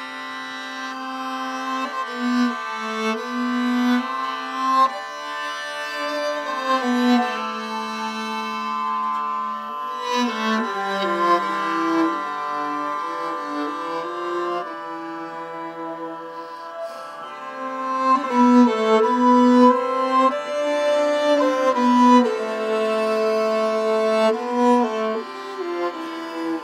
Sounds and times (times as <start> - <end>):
Violin, fiddle: 0.0 - 26.6.